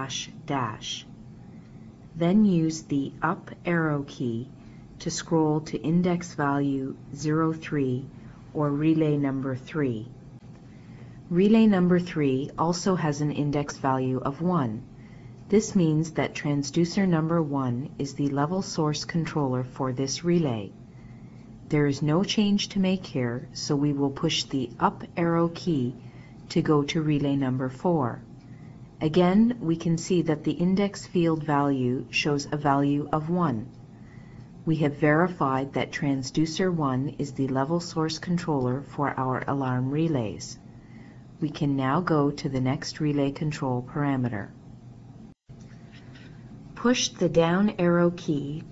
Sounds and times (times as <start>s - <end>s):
Speech: 0.0s - 1.1s, 2.2s - 10.2s, 11.3s - 14.9s, 15.5s - 20.8s, 21.7s - 28.3s, 29.0s - 33.8s, 34.6s - 40.6s, 41.4s - 44.6s, 46.8s - 48.7s.